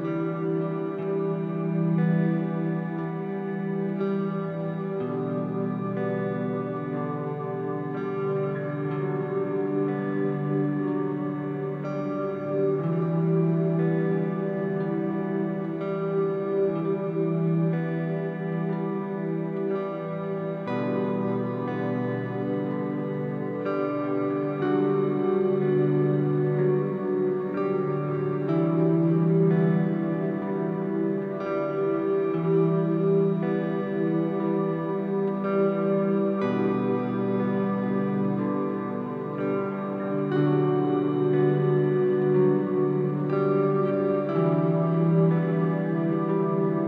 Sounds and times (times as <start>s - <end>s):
Music: 0.0s - 46.8s.